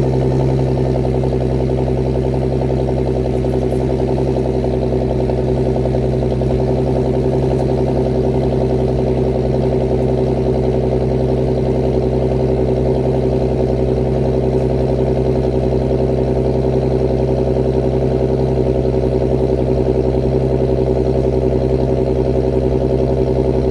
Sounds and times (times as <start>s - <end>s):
Car: 0.0s - 23.7s.